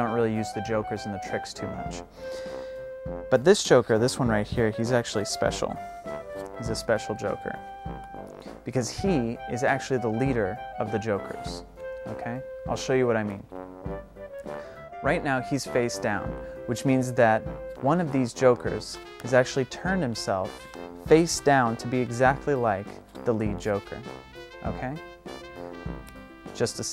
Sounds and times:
Speech: 0.0s - 2.0s, 3.3s - 5.8s, 6.6s - 7.6s, 8.7s - 13.4s, 15.0s - 20.5s, 21.1s - 25.0s, 26.6s - 26.9s
Music: 0.0s - 26.9s.

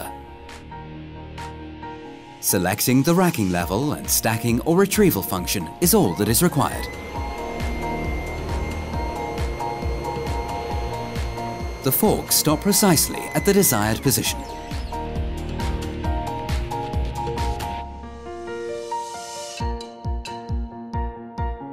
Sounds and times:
Music: 0.0s - 21.7s
Speech: 2.4s - 6.9s, 11.8s - 14.4s.

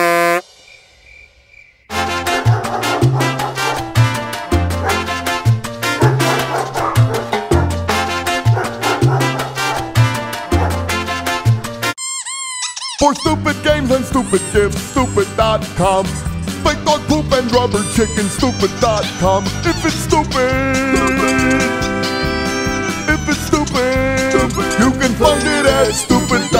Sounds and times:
Music: 1.9s - 12.0s, 13.0s - 26.5s.

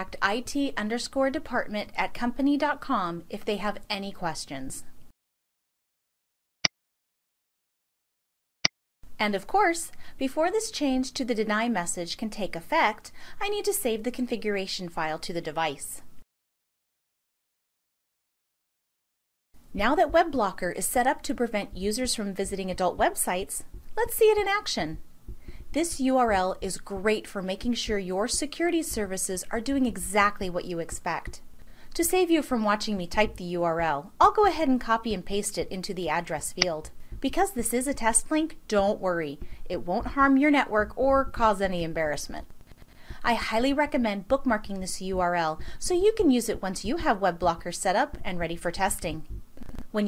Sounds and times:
Speech: 0.0s - 4.9s, 9.2s - 16.1s, 19.7s - 25.0s, 25.7s - 31.4s, 32.0s - 42.5s, 43.2s - 50.0s.

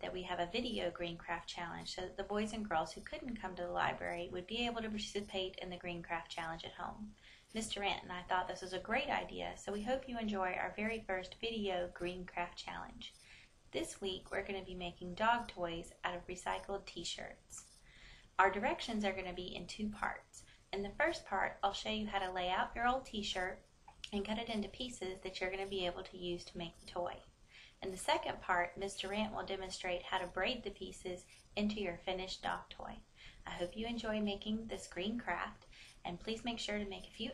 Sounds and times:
Speech: 0.0s - 13.2s, 13.8s - 17.6s, 18.4s - 27.2s, 27.8s - 37.3s.

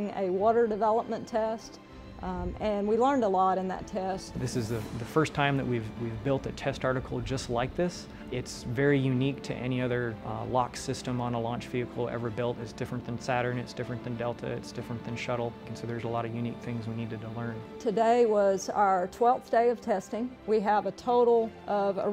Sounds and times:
Music: 0.0s - 22.1s.

